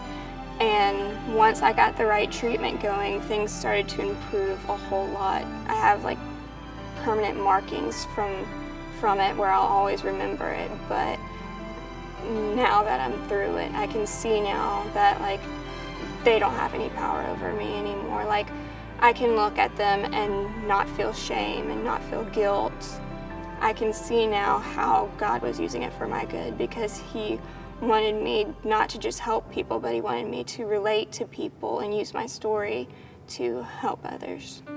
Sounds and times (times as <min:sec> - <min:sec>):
Music: 0:00.0 - 0:34.7
Speech: 0:00.6 - 0:06.2, 0:07.0 - 0:11.2, 0:12.2 - 0:15.4, 0:16.2 - 0:23.0, 0:23.6 - 0:34.7.